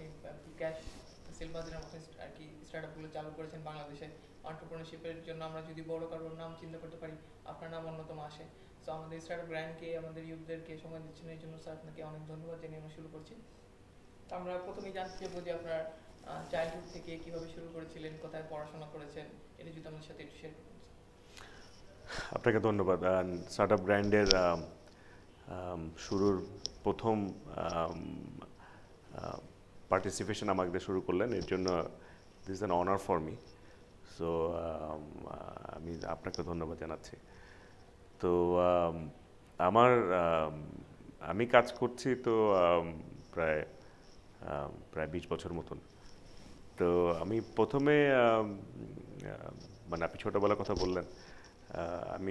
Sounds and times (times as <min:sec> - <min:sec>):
Speech: 0:00.0 - 0:13.5, 0:14.3 - 0:20.8, 0:22.3 - 0:24.7, 0:25.5 - 0:28.5, 0:29.1 - 0:33.4, 0:34.1 - 0:37.2, 0:38.2 - 0:43.7, 0:44.4 - 0:45.8, 0:46.8 - 0:51.1, 0:51.7 - 0:52.3.